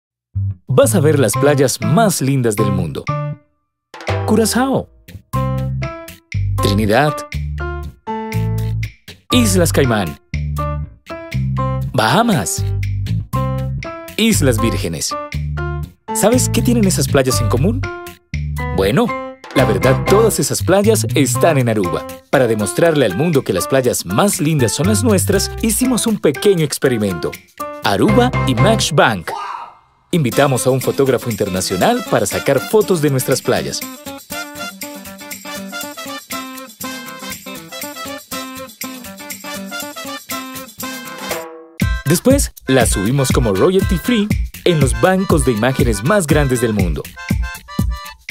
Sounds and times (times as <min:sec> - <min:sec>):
Music: 0:00.4 - 0:29.2, 0:30.2 - 0:48.3
Speech: 0:00.7 - 0:03.1, 0:04.3 - 0:04.9, 0:06.6 - 0:07.3, 0:09.3 - 0:10.2, 0:11.9 - 0:12.7, 0:14.2 - 0:15.2, 0:16.2 - 0:17.8, 0:18.7 - 0:33.9, 0:42.1 - 0:47.1.